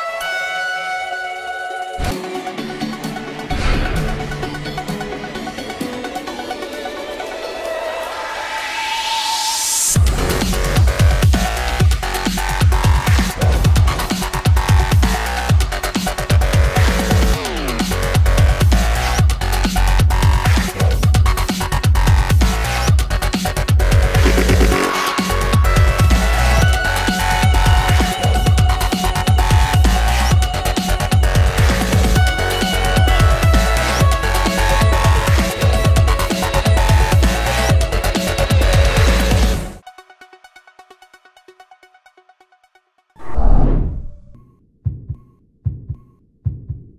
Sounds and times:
Music: 0:00.0 - 0:43.6, 0:44.3 - 0:46.9.

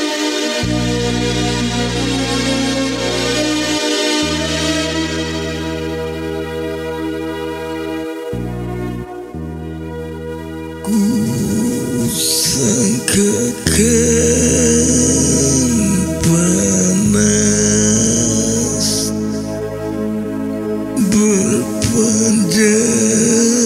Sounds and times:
Music: 0:00.0 - 0:23.6.

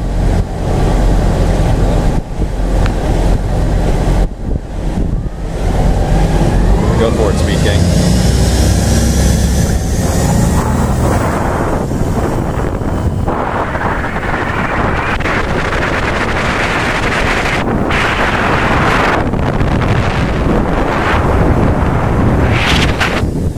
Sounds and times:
Speech: 0:06.8 - 0:07.9.

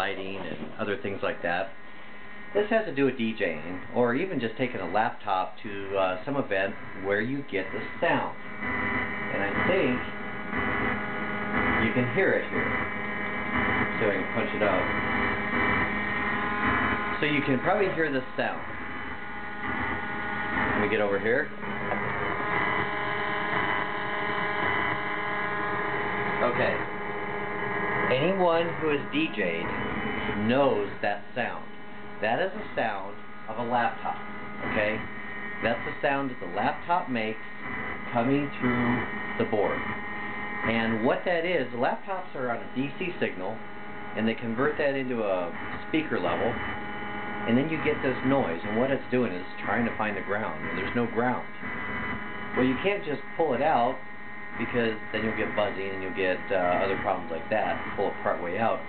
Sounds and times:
Speech: 0:00.0 - 0:01.8, 0:02.5 - 0:08.4, 0:09.3 - 0:10.1, 0:11.8 - 0:12.7, 0:13.9 - 0:15.0, 0:17.1 - 0:18.7, 0:20.7 - 0:21.6, 0:26.4 - 0:26.9, 0:28.1 - 0:29.7, 0:30.3 - 0:37.5, 0:38.1 - 0:39.9, 0:40.7 - 0:43.6, 0:44.2 - 0:46.6, 0:47.5 - 0:51.6, 0:52.6 - 0:54.0, 0:54.6 - 0:58.8
Vibration: 0:00.0 - 0:58.8.

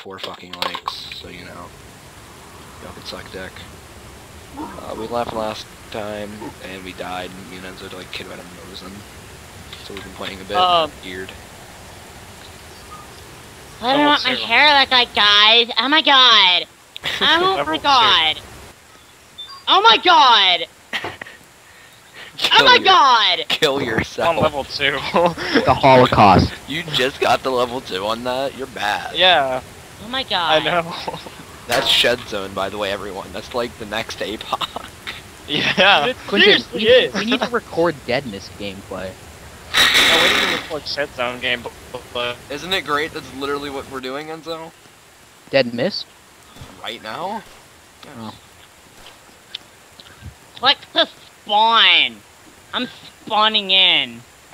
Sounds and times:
Speech: 0:00.0 - 0:01.7, 0:02.8 - 0:03.6, 0:04.6 - 0:09.0, 0:09.8 - 0:11.3, 0:13.8 - 0:18.4, 0:19.7 - 0:21.2, 0:22.2 - 0:39.2, 0:40.0 - 0:44.7, 0:46.6 - 0:47.4, 0:48.0 - 0:48.4, 0:50.6 - 0:52.2, 0:52.8 - 0:54.2
Outside, rural or natural: 0:00.0 - 0:54.5.

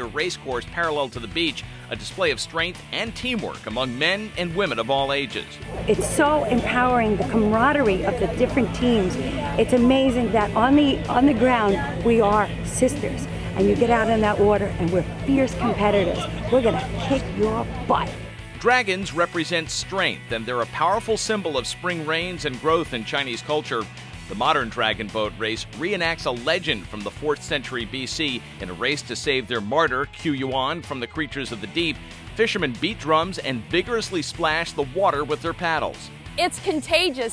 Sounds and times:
Music: 0:00.0 - 0:37.3
Speech: 0:00.0 - 0:37.3.

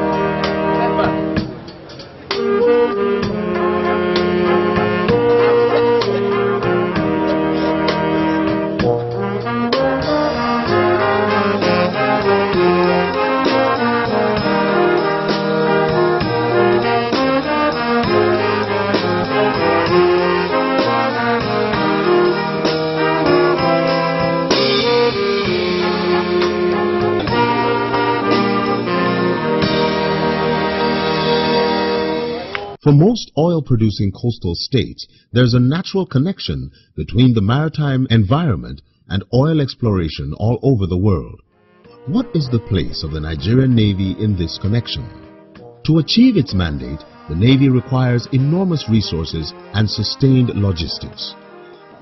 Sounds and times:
Music: 0:00.0 - 0:32.9, 0:41.1 - 0:52.0.

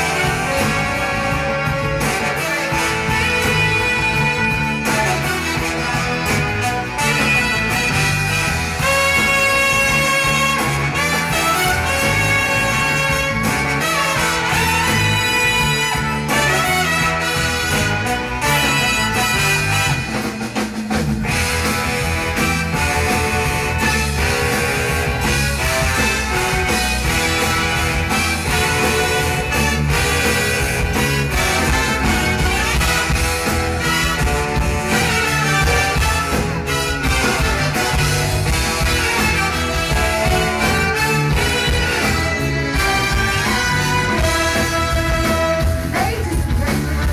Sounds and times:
Music: 0:00.0 - 0:47.1.

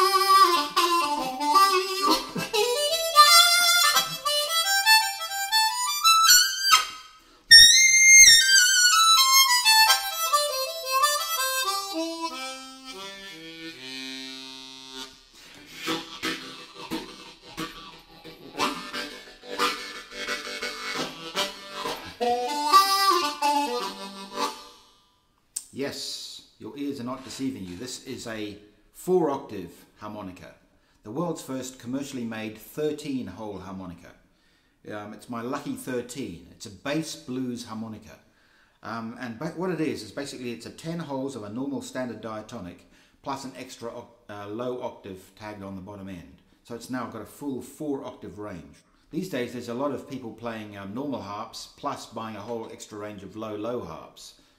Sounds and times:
Wind instrument, woodwind instrument: 0:00.0 - 0:25.2
Harmonica: 0:00.0 - 0:25.3.

